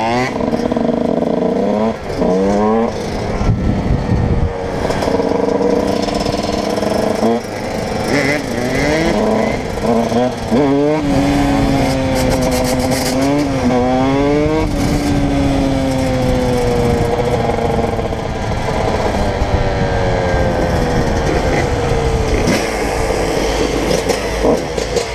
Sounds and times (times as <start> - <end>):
Motorcycle: 0.0 - 25.1
Outside, urban or manmade: 0.0 - 25.1.